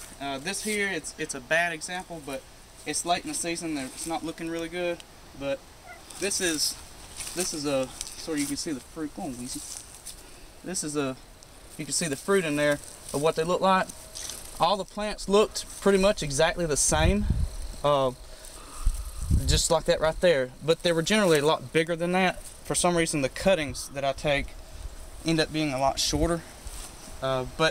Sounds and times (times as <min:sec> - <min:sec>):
Speech: 0:00.2 - 0:05.6, 0:06.2 - 0:06.8, 0:07.4 - 0:09.7, 0:10.7 - 0:11.2, 0:11.8 - 0:13.9, 0:14.6 - 0:18.2, 0:19.4 - 0:24.6, 0:25.2 - 0:26.5, 0:27.2 - 0:27.7.